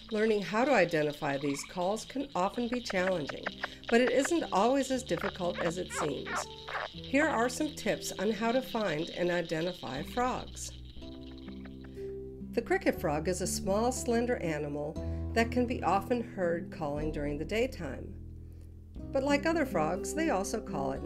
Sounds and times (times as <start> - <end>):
Frog: 0.0 - 12.0.